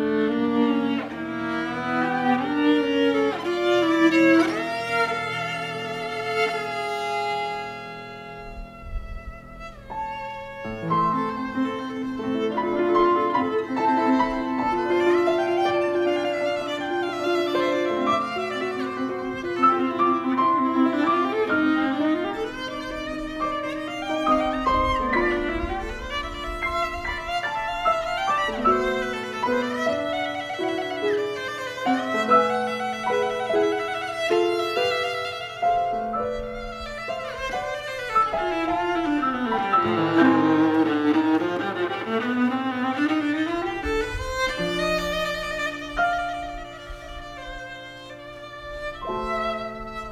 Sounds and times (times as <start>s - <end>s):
Violin, fiddle: 0.0s - 50.1s.